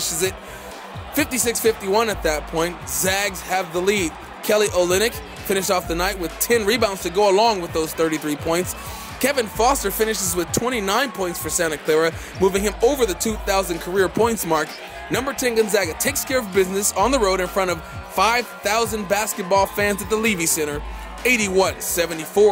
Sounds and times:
Speech: 0:00.0 - 0:00.4, 0:01.0 - 0:22.5
Music: 0:00.0 - 0:22.5
Shout: 0:00.0 - 0:22.5.

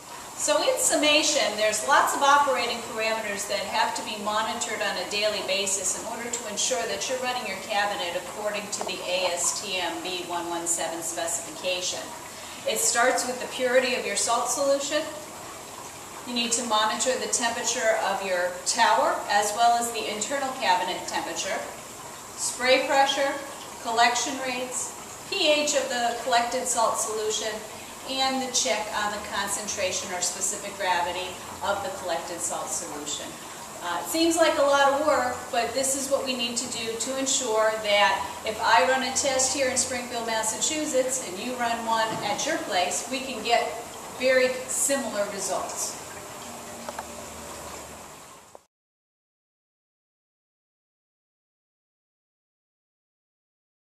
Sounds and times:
Boiling: 0:00.0 - 0:48.7
Gush: 0:00.0 - 0:48.7
Speech: 0:00.4 - 0:12.1, 0:12.7 - 0:15.2, 0:16.3 - 0:21.8, 0:22.4 - 0:46.0.

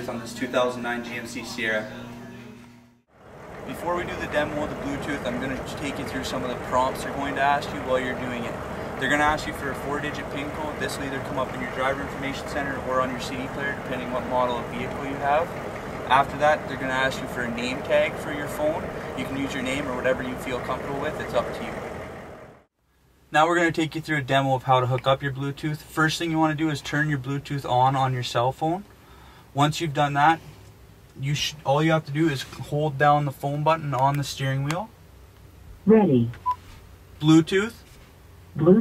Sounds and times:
Speech: 0:00.0 - 0:02.6, 0:03.7 - 0:15.5, 0:16.1 - 0:21.8, 0:23.3 - 0:28.9, 0:29.6 - 0:30.4, 0:31.2 - 0:34.9, 0:35.9 - 0:36.4, 0:37.2 - 0:37.8, 0:38.6 - 0:38.8.

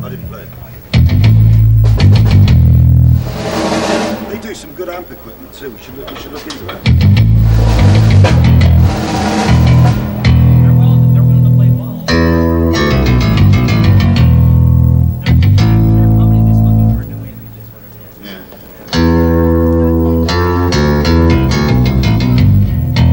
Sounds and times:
Guitar: 0:00.0 - 0:23.1
Double bass: 0:01.0 - 0:03.8, 0:06.9 - 0:17.3, 0:19.0 - 0:23.1.

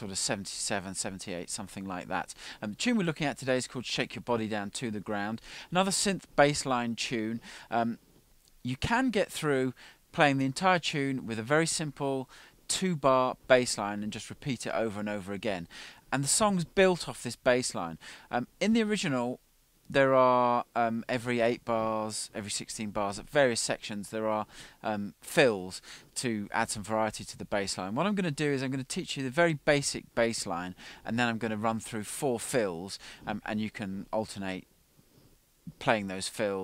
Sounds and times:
Speech: 0:00.0 - 0:08.0, 0:08.6 - 0:34.7, 0:35.7 - 0:36.6.

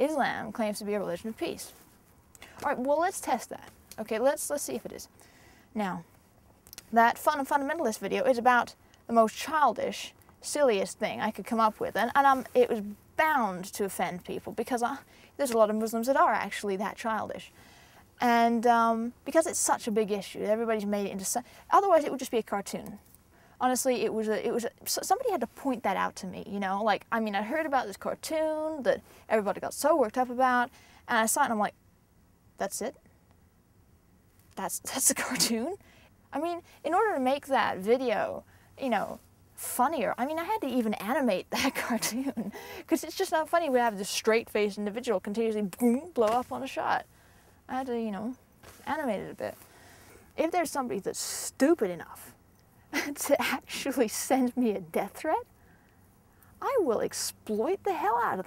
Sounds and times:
Female speech, woman speaking: 0:00.0 - 0:01.8, 0:02.6 - 0:05.1, 0:05.8 - 0:06.1, 0:06.8 - 0:17.5, 0:18.2 - 0:23.0, 0:23.6 - 0:31.7, 0:32.6 - 0:33.0, 0:34.6 - 0:35.8, 0:36.4 - 0:47.0, 0:47.7 - 0:49.6, 0:50.4 - 0:52.4, 0:53.0 - 0:55.5, 0:56.6 - 0:58.4.

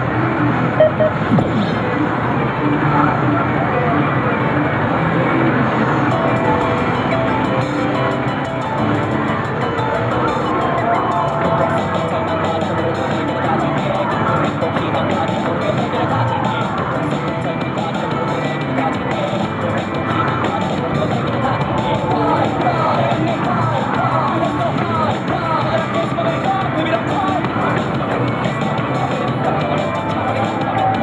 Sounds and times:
Music: 0:00.0 - 0:31.0.

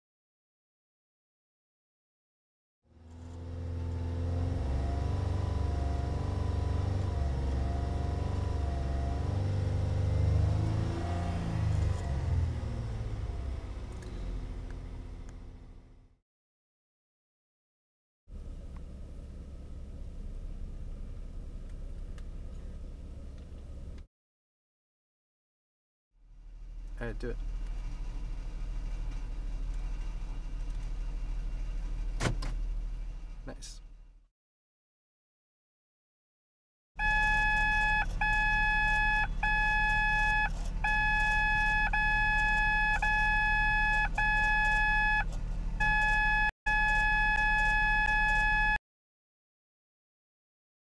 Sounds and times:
Speech: 0:27.0 - 0:27.4, 0:33.4 - 0:33.9.

